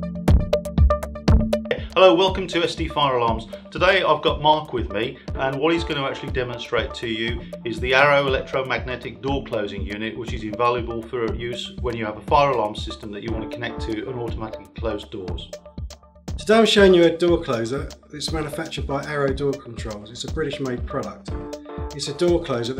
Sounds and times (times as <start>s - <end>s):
Music: 0.0s - 22.8s
Speech: 1.7s - 15.6s, 16.4s - 21.4s, 22.0s - 22.8s.